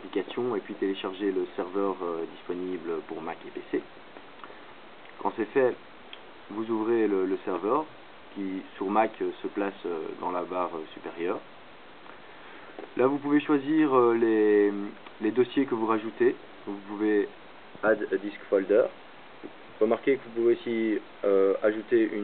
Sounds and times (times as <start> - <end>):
Speech: 0.0 - 3.9, 5.2 - 5.8, 6.5 - 11.5, 12.9 - 19.0, 19.8 - 22.2.